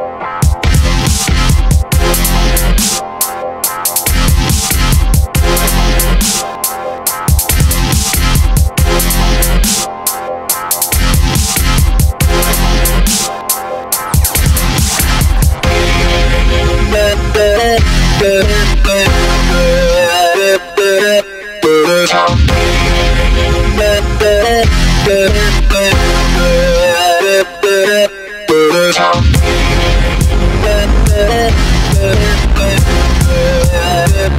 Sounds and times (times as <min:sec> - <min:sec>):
Dubstep: 0:00.0 - 0:34.3.